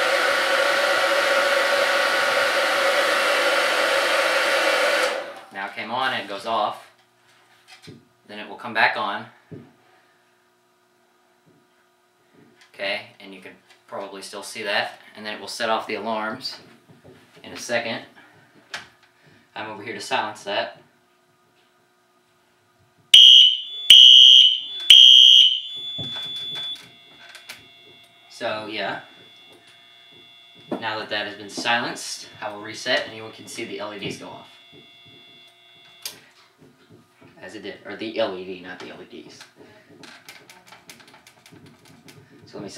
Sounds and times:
Speech: 5.5 - 7.0, 8.3 - 9.4, 12.7 - 16.7, 17.4 - 18.2, 19.6 - 20.8, 28.3 - 29.1, 30.8 - 34.5, 37.4 - 39.9, 42.5 - 42.7
Fire alarm: 23.2 - 36.5.

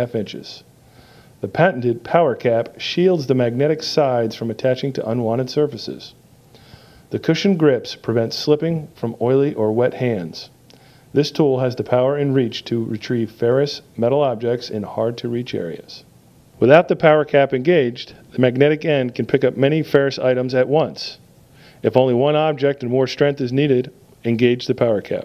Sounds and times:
Speech: 0.0 - 0.7, 1.4 - 6.2, 7.1 - 10.6, 11.2 - 21.2, 21.8 - 25.2.

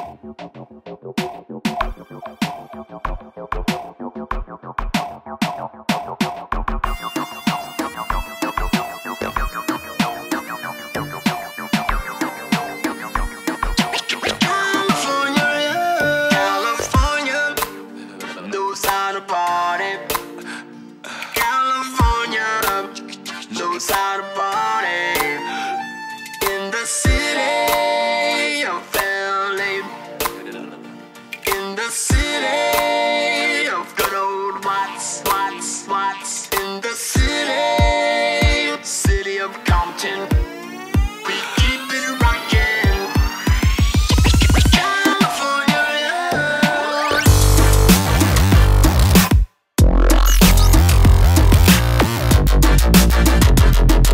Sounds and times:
Dubstep: 0.0 - 54.1.

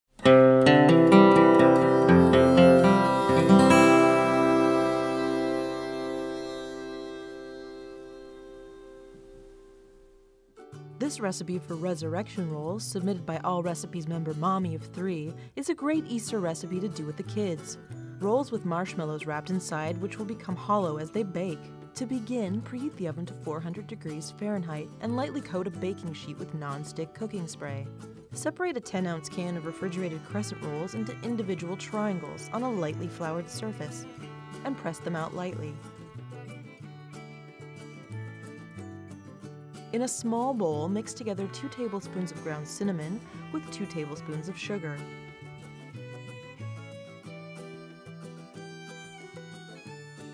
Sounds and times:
Strum: 0.2 - 10.4.

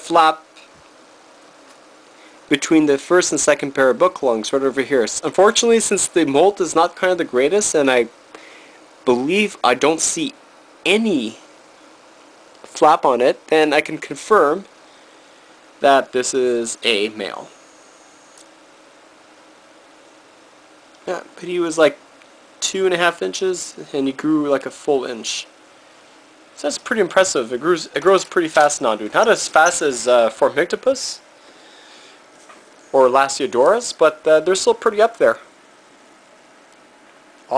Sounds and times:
Speech: 0.0 - 0.6, 2.5 - 8.1, 9.0 - 11.4, 12.7 - 14.7, 15.8 - 17.6, 21.0 - 22.0, 22.6 - 25.5, 26.6 - 31.2, 32.9 - 35.5
Inside, small room: 0.0 - 37.5.

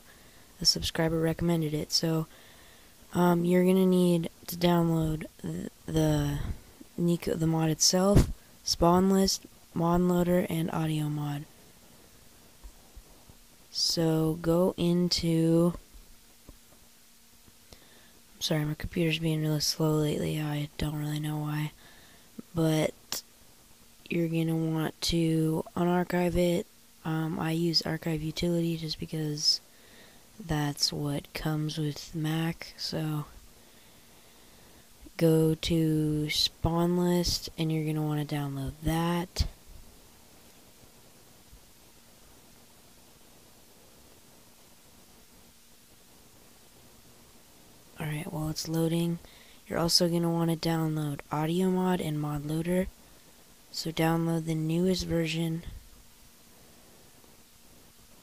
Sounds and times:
Speech: 0.6 - 2.3, 3.1 - 11.5, 13.7 - 15.8, 18.4 - 21.8, 22.4 - 23.2, 24.1 - 29.6, 30.4 - 33.4, 35.1 - 39.6, 48.0 - 53.0, 53.7 - 55.8.

